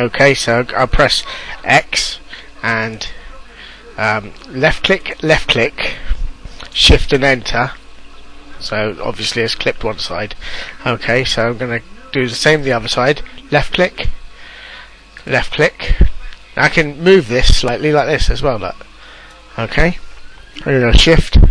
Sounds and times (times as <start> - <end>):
Speech: 0.0 - 6.0, 6.6 - 14.2, 15.2 - 18.9, 19.6 - 20.0, 20.6 - 21.5.